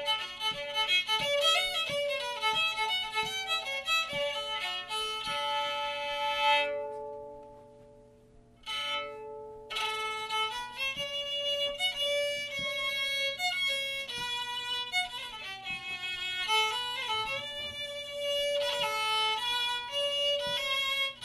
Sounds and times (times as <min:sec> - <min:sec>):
Violin, fiddle: 0:00.0 - 0:07.4, 0:08.6 - 0:21.2.